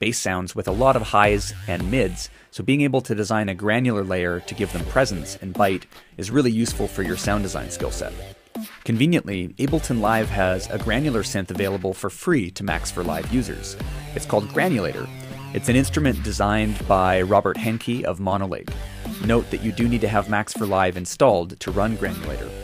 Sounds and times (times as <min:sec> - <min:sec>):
Speech: 0:00.0 - 0:08.2, 0:08.9 - 0:22.6
Music: 0:00.6 - 0:02.5, 0:03.6 - 0:22.6.